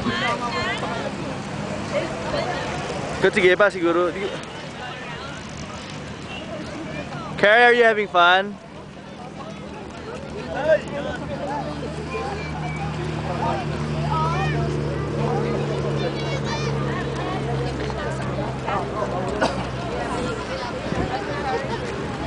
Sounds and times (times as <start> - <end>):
Clip-clop: 0.0 - 22.2.